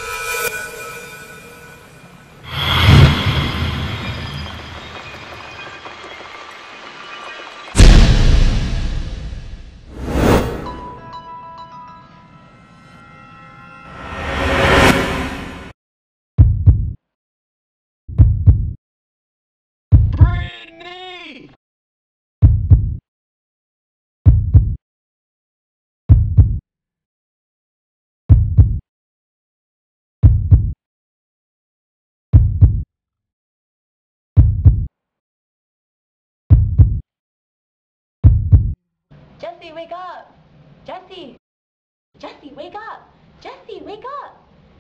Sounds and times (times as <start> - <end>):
Speech: 20.1 - 21.6, 39.4 - 41.4, 42.2 - 44.5.